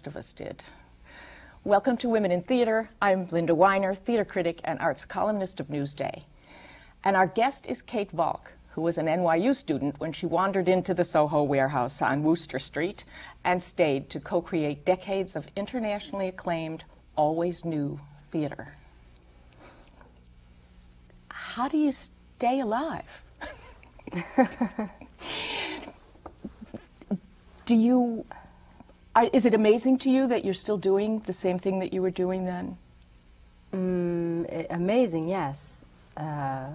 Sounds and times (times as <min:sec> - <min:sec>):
Female speech, woman speaking: 0:00.0 - 0:00.7, 0:01.7 - 0:06.3, 0:07.0 - 0:18.8, 0:21.3 - 0:23.2, 0:27.7 - 0:28.3, 0:29.2 - 0:32.8, 0:33.8 - 0:36.7.